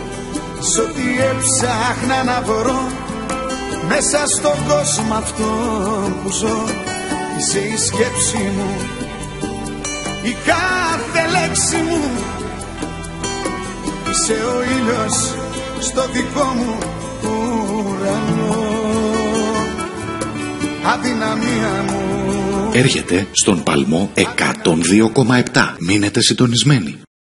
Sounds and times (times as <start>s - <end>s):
Music: 0.0s - 27.1s
Speech: 22.7s - 27.1s.